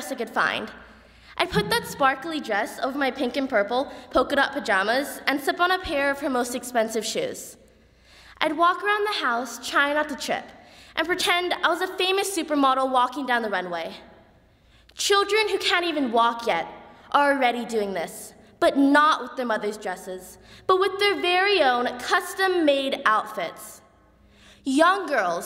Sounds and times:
Female speech, woman speaking: 0.0s - 0.7s, 1.4s - 7.6s, 8.4s - 10.4s, 11.0s - 14.0s, 15.0s - 23.8s, 24.7s - 25.4s
Narration, monologue: 0.0s - 25.4s.

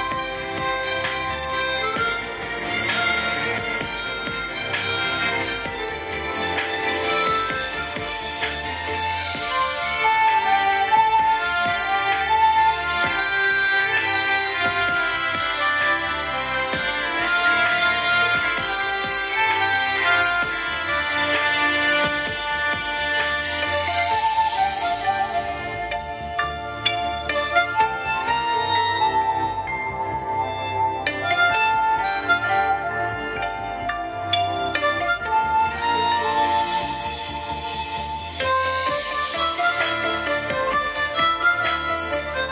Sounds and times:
Harmonica: 0.0s - 42.5s
Wind instrument, woodwind instrument: 0.0s - 42.5s.

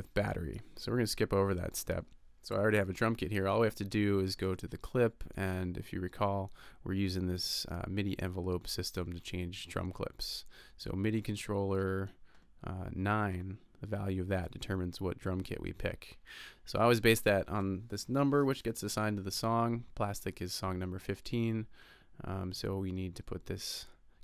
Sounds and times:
Speech: 0.0s - 24.0s.

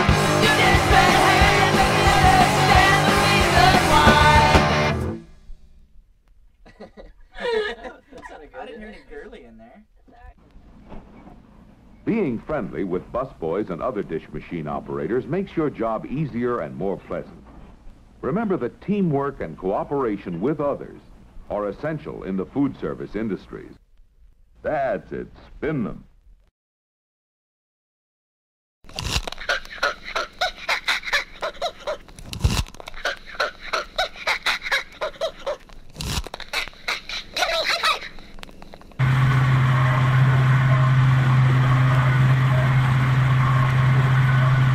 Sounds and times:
Speech: 8.2s - 10.4s, 12.1s - 17.4s, 18.2s - 23.8s, 24.6s - 26.1s.

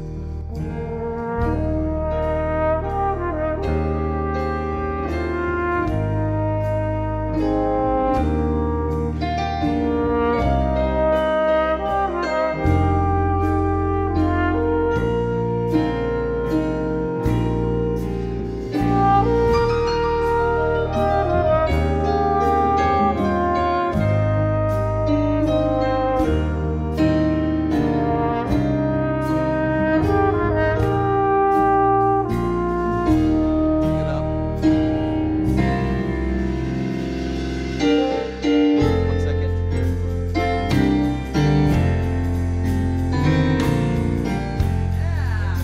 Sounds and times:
Gospel music: 0.0s - 45.6s.

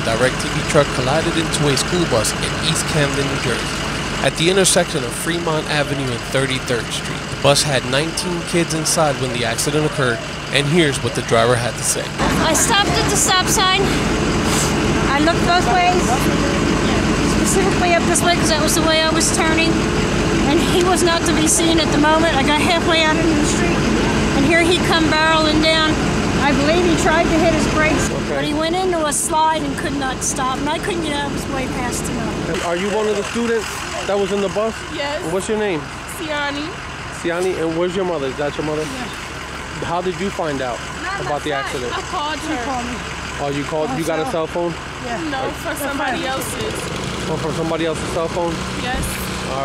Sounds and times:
Speech: 0.0s - 14.0s, 15.1s - 19.8s, 20.5s - 39.2s, 39.8s - 49.6s
Vehicle: 0.0s - 49.6s.

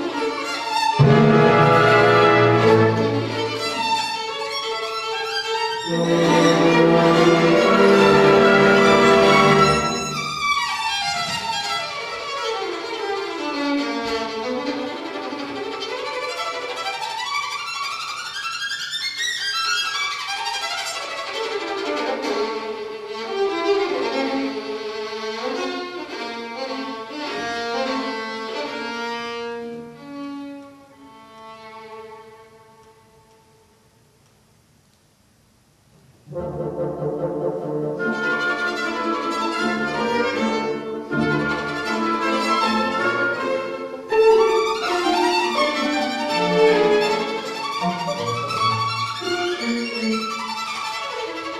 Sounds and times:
Violin, fiddle: 0.0s - 1.1s, 2.1s - 33.1s, 38.0s - 51.5s.

